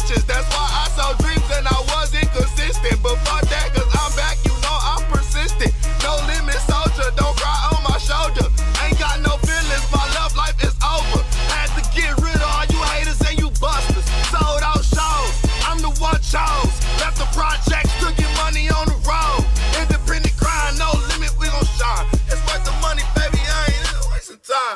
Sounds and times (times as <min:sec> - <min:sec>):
Music: 0:00.0 - 0:24.2.